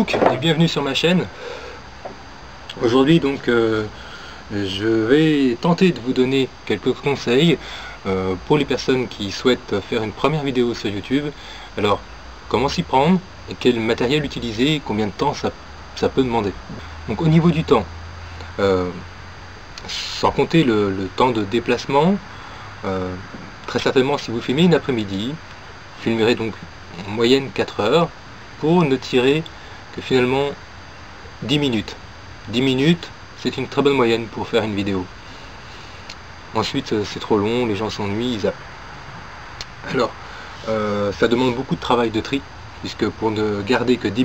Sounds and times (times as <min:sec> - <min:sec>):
Speech: 0:00.0 - 0:01.3, 0:02.7 - 0:17.9, 0:18.6 - 0:19.1, 0:19.8 - 0:25.4, 0:26.0 - 0:30.6, 0:31.4 - 0:35.1, 0:36.5 - 0:38.6, 0:39.8 - 0:44.2.